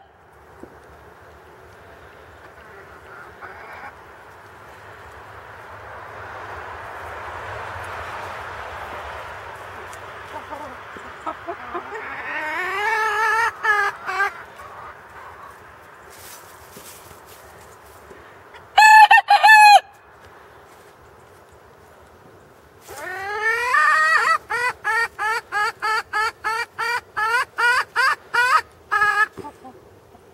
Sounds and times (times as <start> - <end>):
Chicken, rooster: 1.8 - 4.5, 9.7 - 20.0, 22.8 - 30.3.